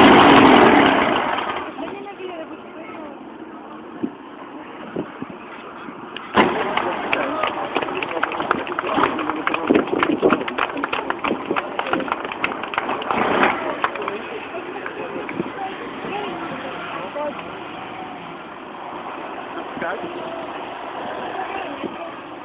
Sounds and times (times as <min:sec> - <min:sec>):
Truck: 0:00.0 - 0:22.4
Speech: 0:01.7 - 0:12.2.